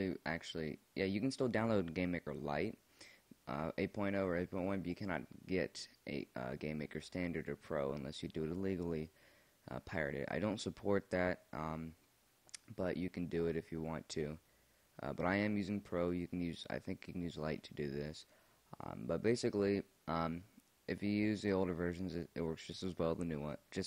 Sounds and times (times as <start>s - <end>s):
Speech: 0.0s - 2.8s, 3.4s - 9.1s, 9.7s - 12.0s, 12.6s - 14.4s, 15.0s - 23.8s.